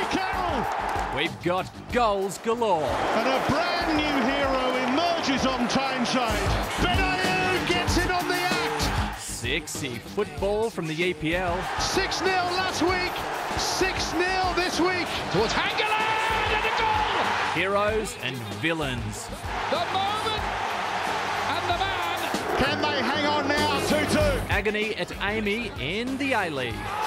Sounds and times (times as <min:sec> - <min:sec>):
Music: 0:00.0 - 0:27.0
Speech: 0:01.2 - 0:17.0, 0:21.5 - 0:26.8.